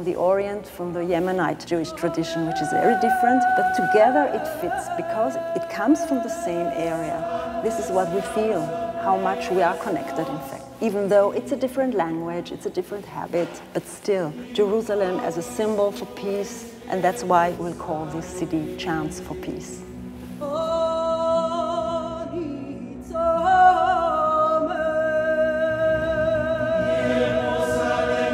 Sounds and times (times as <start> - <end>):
Speech: 0.0 - 19.8
Music: 0.0 - 28.3.